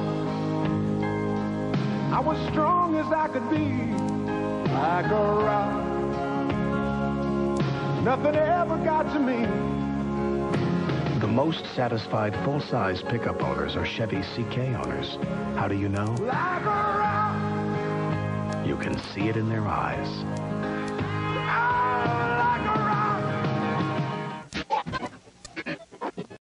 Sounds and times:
Music: 0.0s - 26.4s
Speech: 11.2s - 16.4s, 18.6s - 20.2s.

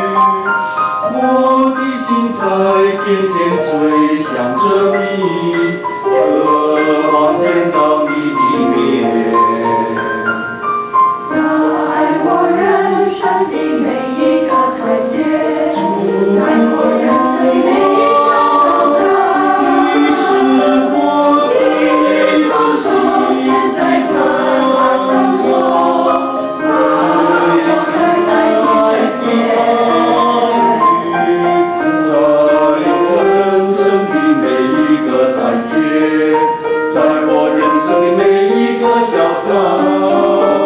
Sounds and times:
Choir: 0.0s - 40.6s
Christian music: 0.0s - 40.6s.

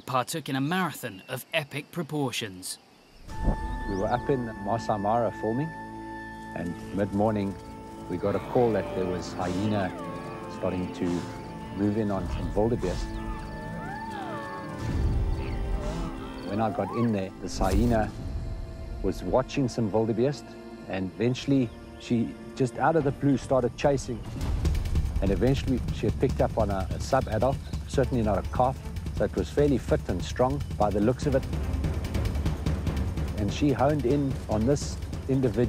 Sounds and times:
Music: 3.2s - 35.6s
Speech: 6.6s - 10.0s, 10.6s - 13.1s, 16.5s - 18.2s, 19.1s - 24.2s, 25.2s - 31.4s, 33.4s - 35.6s.

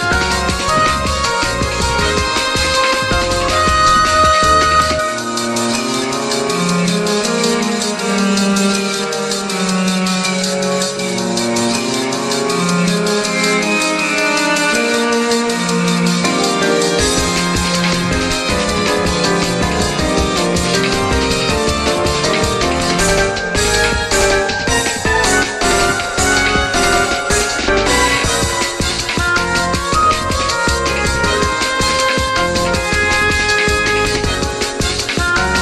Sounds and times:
Music: 0.0s - 35.6s.

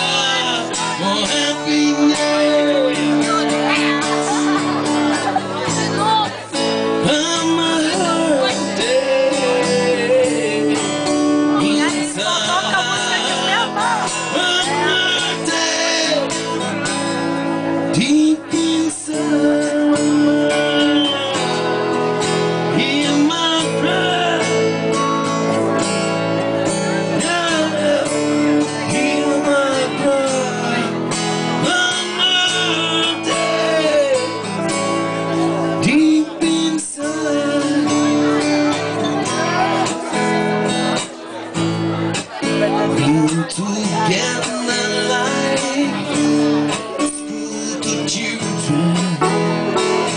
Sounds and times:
Music: 0.0s - 50.1s.

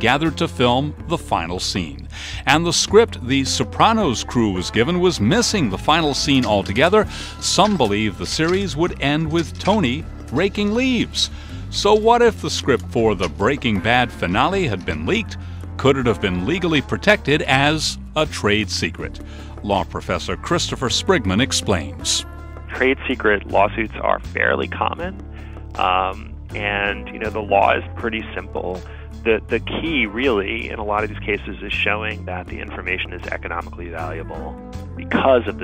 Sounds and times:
Speech: 0.0s - 25.2s, 25.8s - 35.6s
Music: 0.0s - 35.6s.

